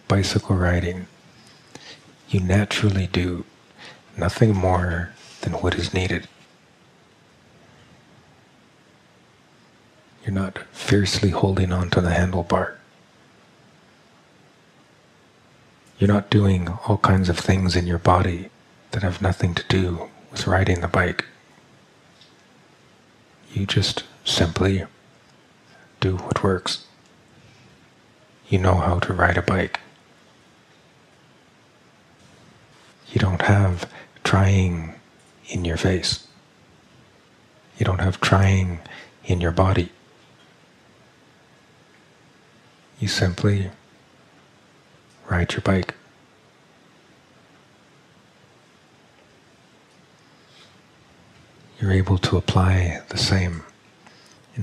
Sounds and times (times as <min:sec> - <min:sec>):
Speech: 0:00.0 - 0:01.1, 0:02.3 - 0:06.3, 0:10.2 - 0:12.8, 0:16.0 - 0:21.4, 0:23.5 - 0:24.9, 0:26.0 - 0:26.9, 0:28.4 - 0:29.9, 0:33.0 - 0:36.3, 0:37.7 - 0:40.0, 0:43.0 - 0:43.8, 0:45.2 - 0:46.0, 0:51.8 - 0:53.8.